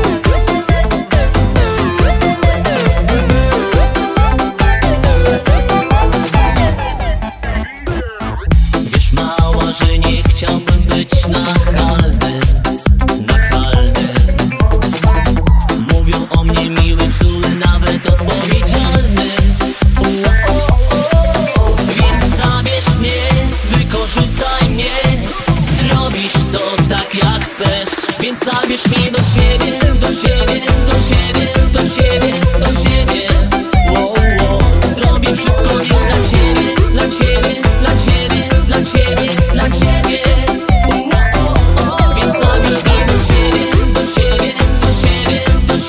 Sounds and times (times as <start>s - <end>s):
Dance music: 0.0s - 45.8s
Disco: 0.0s - 45.8s.